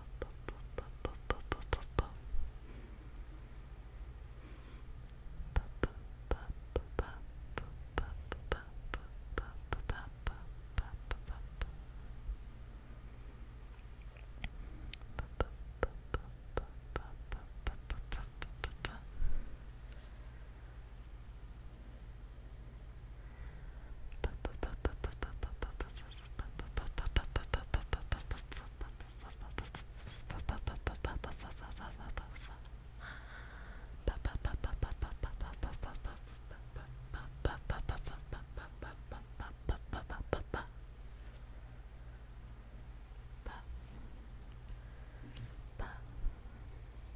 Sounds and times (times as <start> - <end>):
Whispering: 0.2 - 2.2, 5.5 - 11.7, 16.1 - 19.2, 24.2 - 32.8, 34.0 - 40.7, 43.4 - 44.0, 45.4 - 46.4.